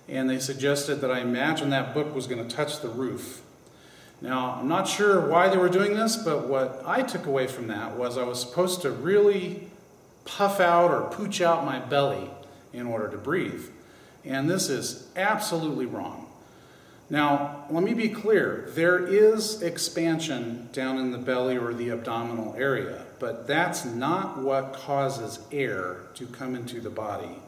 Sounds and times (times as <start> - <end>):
Speech: 0.0 - 3.5, 4.2 - 9.7, 10.3 - 16.3, 17.1 - 27.4.